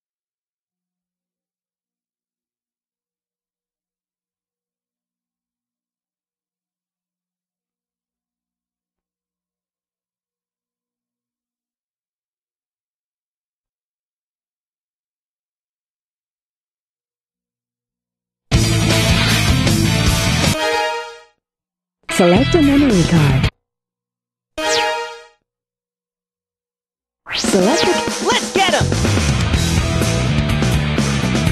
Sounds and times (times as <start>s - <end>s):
Music: 18.5s - 21.4s, 22.1s - 23.5s, 27.4s - 31.5s
Speech: 22.1s - 23.5s, 27.4s - 28.9s.